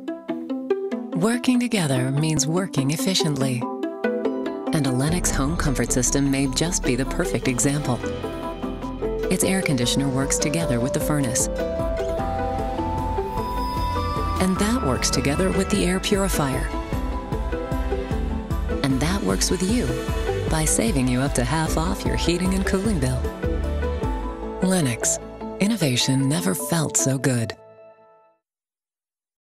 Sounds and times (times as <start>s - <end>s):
Music: 0.0s - 28.5s
Speech: 1.2s - 3.7s, 4.7s - 8.1s, 9.3s - 11.5s, 14.4s - 16.7s, 18.8s - 23.3s, 24.6s - 27.6s.